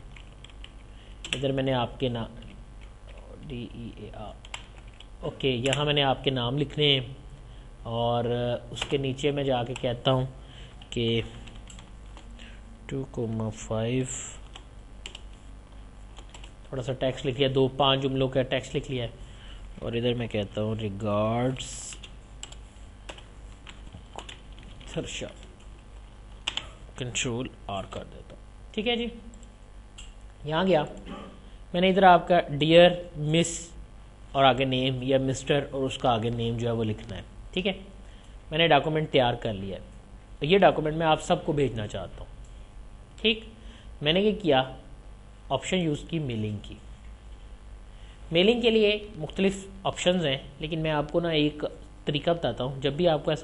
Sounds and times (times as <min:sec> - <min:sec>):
Computer keyboard: 0:00.1 - 0:01.4, 0:04.4 - 0:05.9, 0:10.8 - 0:12.2, 0:14.4 - 0:15.3, 0:16.2 - 0:16.5, 0:21.9 - 0:25.7, 0:26.4 - 0:26.8.